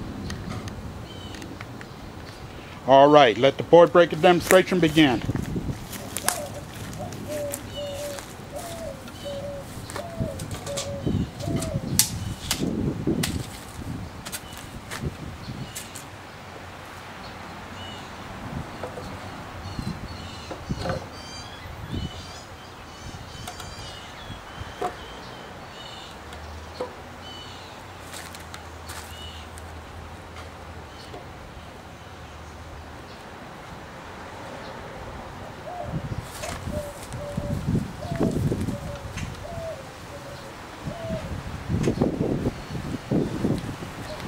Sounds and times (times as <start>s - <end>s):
Speech: 2.9s - 5.3s.